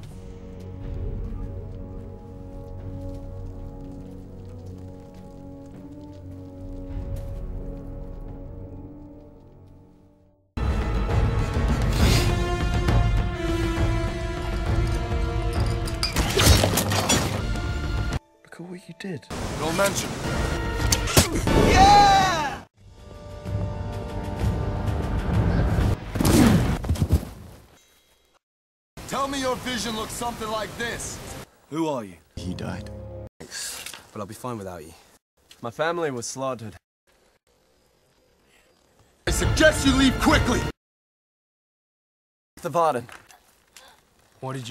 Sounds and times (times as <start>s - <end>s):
Music: 0.0s - 26.2s, 32.4s - 33.3s, 39.3s - 40.8s
Speech: 18.5s - 20.1s, 29.1s - 32.9s, 35.6s - 36.8s, 39.3s - 40.7s, 42.6s - 43.1s, 44.4s - 44.7s.